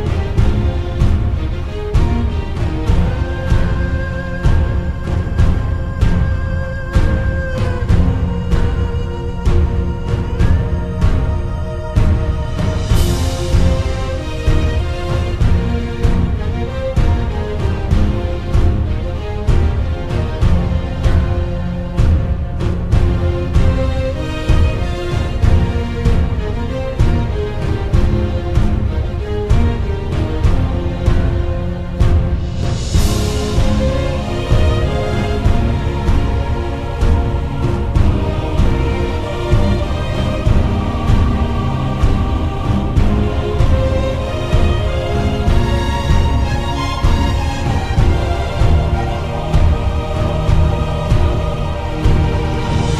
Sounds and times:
Theme music: 0.0s - 53.0s.

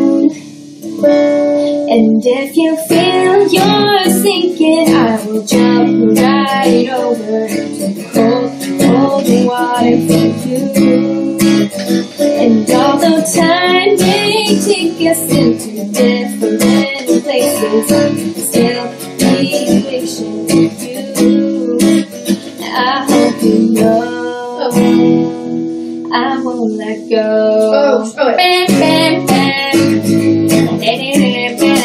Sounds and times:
Music: 0.0s - 31.8s.

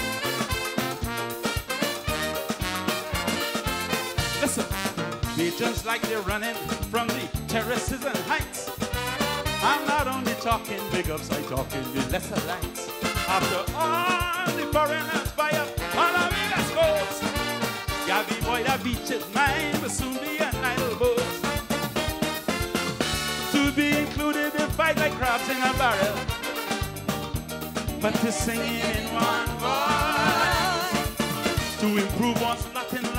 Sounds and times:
Happy music: 0.0s - 33.1s.

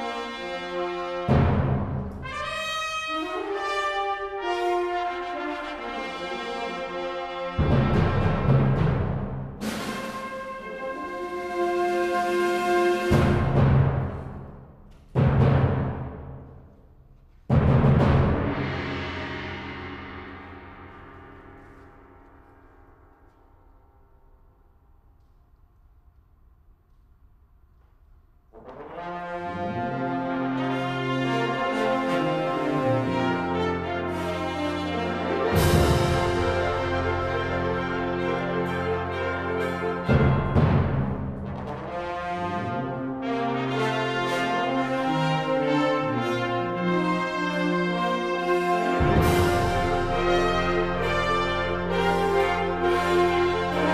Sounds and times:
Trumpet: 0.0s - 14.6s, 28.5s - 53.9s
Orchestra: 0.0s - 25.5s, 28.4s - 53.9s
Timpani: 0.0s - 25.5s, 28.4s - 53.9s.

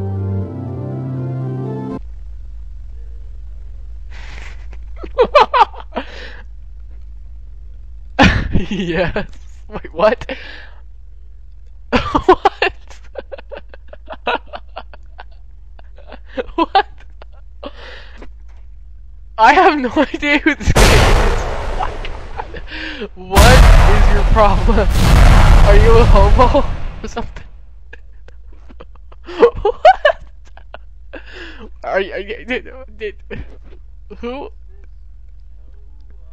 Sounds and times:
Music: 0.0s - 2.0s
Speech: 8.6s - 10.4s, 19.4s - 21.5s, 23.0s - 25.0s, 25.6s - 27.4s, 31.7s - 33.5s, 34.1s - 34.8s, 35.6s - 36.3s.

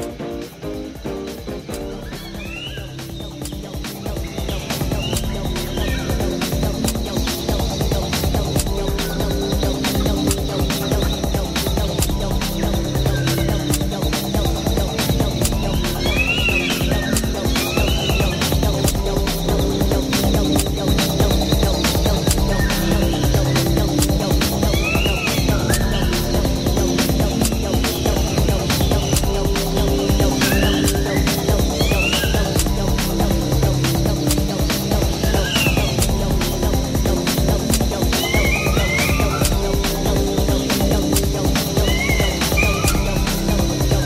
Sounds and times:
Music: 0.0s - 44.0s.

